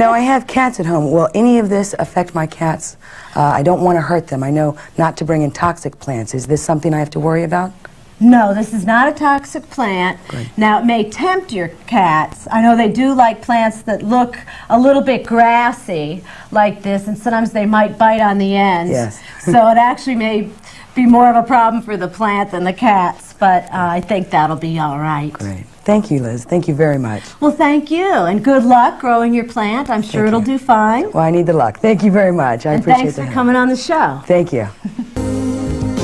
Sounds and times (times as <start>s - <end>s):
Female speech, woman speaking: 0.0s - 34.8s.